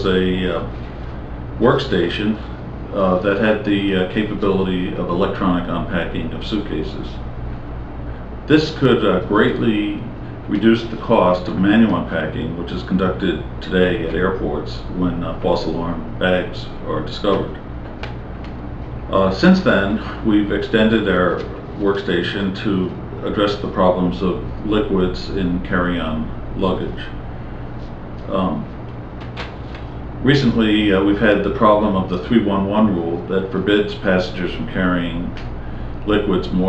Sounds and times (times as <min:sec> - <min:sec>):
Speech: 0:00.0 - 0:00.8, 0:01.6 - 0:07.4, 0:08.4 - 0:17.7, 0:19.1 - 0:27.2, 0:28.2 - 0:28.8, 0:30.2 - 0:36.6.